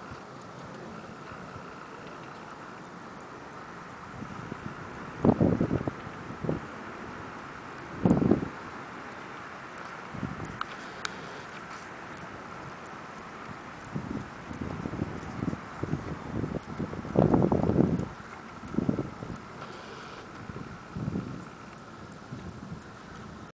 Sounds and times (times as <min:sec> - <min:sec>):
Clip-clop: 0:00.0 - 0:23.5.